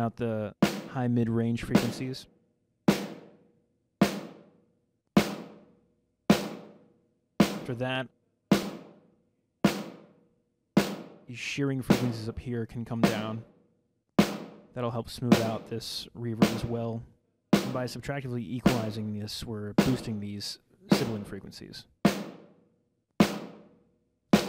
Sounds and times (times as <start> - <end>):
Rimshot: 11.9 - 12.3, 15.3 - 15.7, 16.4 - 16.8, 17.6 - 18.0, 18.6 - 19.0, 19.8 - 20.2, 20.9 - 21.3.